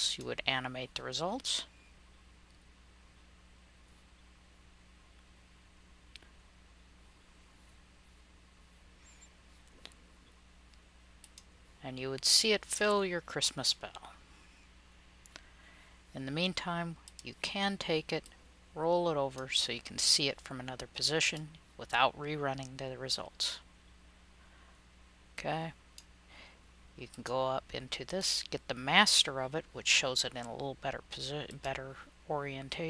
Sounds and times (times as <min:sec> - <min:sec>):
Speech: 0:00.0 - 0:01.7, 0:11.8 - 0:14.2, 0:16.2 - 0:23.7, 0:25.4 - 0:25.8, 0:27.0 - 0:32.8.